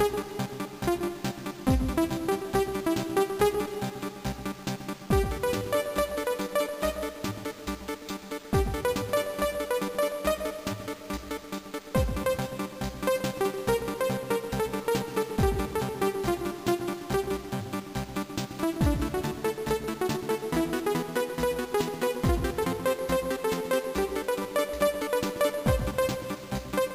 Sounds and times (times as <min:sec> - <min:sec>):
Rhythm and blues: 0:00.0 - 0:26.9.